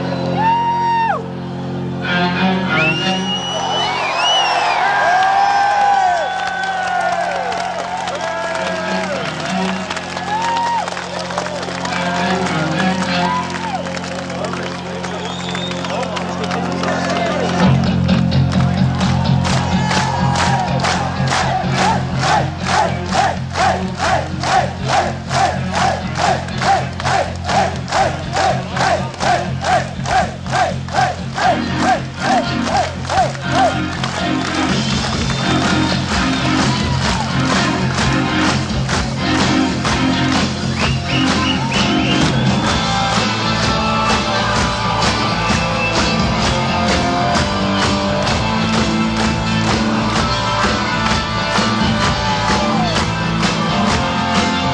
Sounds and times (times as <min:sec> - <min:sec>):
Music: 0:00.0 - 0:54.7.